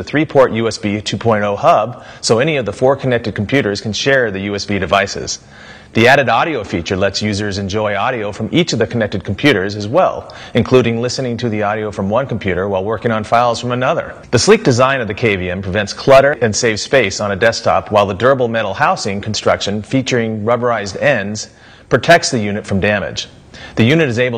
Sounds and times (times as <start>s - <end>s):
Speech: 0.0s - 24.3s.